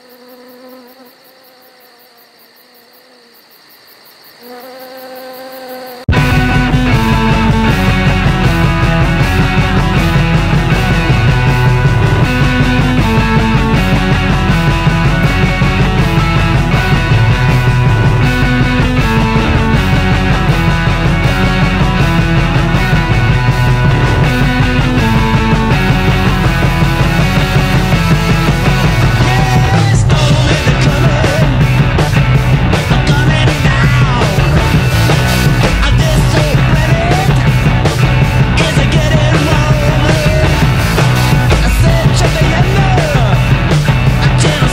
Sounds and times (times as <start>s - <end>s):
Punk rock: 6.1s - 44.7s.